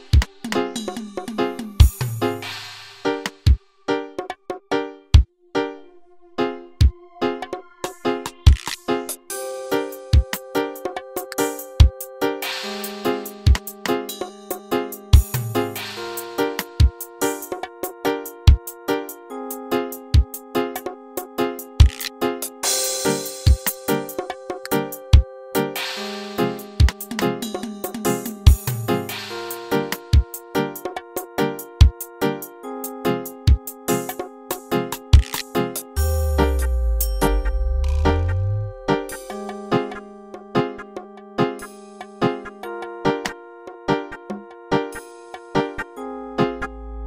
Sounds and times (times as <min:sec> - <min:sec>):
Music: 0:00.0 - 0:47.0.